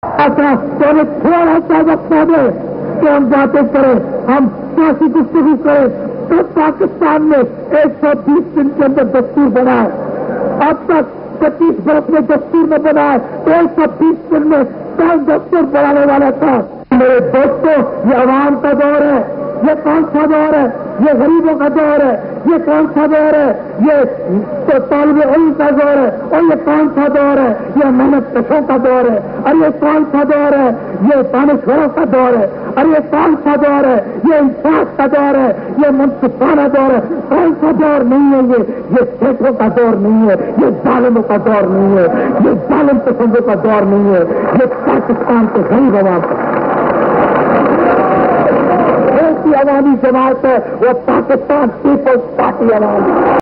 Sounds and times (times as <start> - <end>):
Narration, monologue: 0.0 - 47.7, 48.5 - 53.4
Male speech, man speaking: 0.2 - 10.0, 10.6 - 46.2, 49.1 - 53.1.